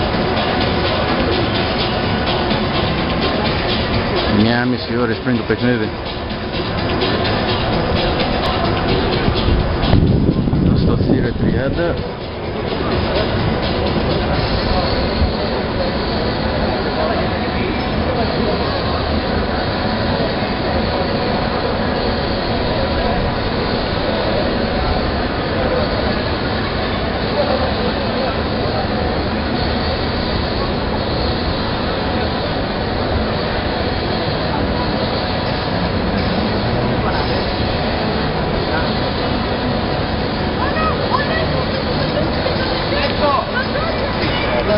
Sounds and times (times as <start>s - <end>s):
Inside, public space: 0.0s - 44.7s
Speech: 4.3s - 6.0s, 10.6s - 12.1s, 24.2s - 30.8s, 40.6s - 44.7s.